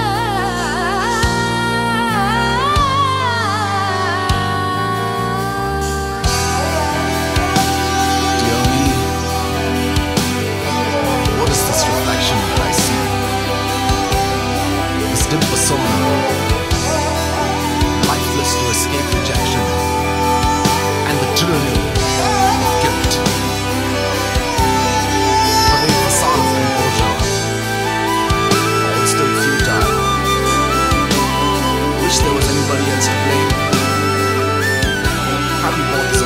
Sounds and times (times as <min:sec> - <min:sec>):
House music: 0:06.4 - 0:36.2
Speech: 0:07.7 - 0:09.3, 0:11.1 - 0:13.4, 0:15.0 - 0:17.1, 0:18.0 - 0:19.9, 0:20.9 - 0:23.5, 0:24.6 - 0:27.6, 0:28.5 - 0:34.0, 0:35.2 - 0:36.2.